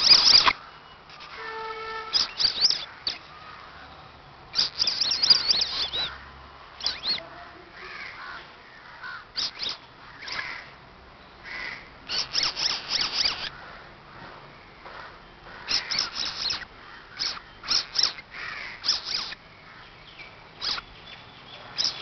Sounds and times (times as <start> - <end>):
Domestic animals, pets: 0.0 - 0.6, 2.1 - 3.2, 4.6 - 6.2, 6.8 - 7.2, 9.4 - 10.6, 12.1 - 13.6, 15.7 - 18.2, 18.8 - 19.4, 20.6 - 20.9, 21.7 - 22.0.